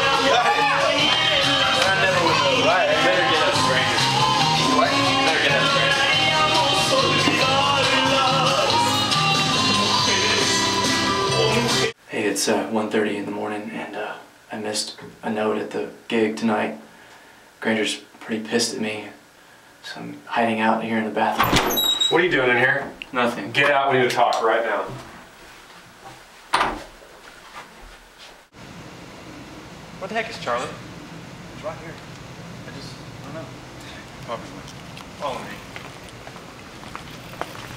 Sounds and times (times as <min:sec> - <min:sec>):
Speech: 0:12.1 - 0:16.8, 0:17.6 - 0:19.2, 0:19.8 - 0:21.4, 0:22.1 - 0:25.0, 0:30.0 - 0:30.8.